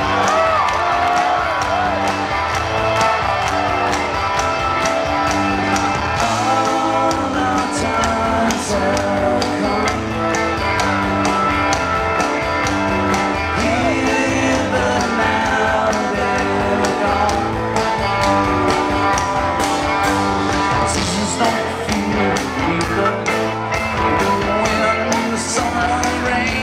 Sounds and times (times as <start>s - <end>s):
Music: 0.0s - 26.6s.